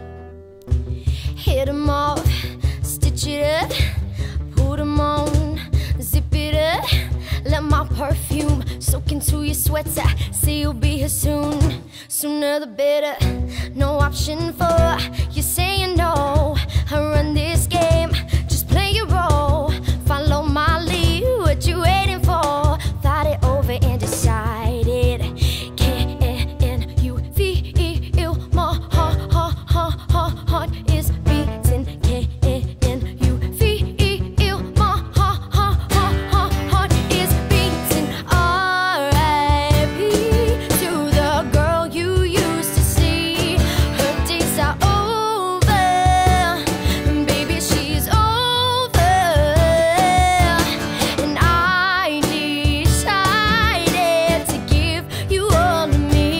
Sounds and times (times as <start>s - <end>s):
Music: 0.0s - 56.3s.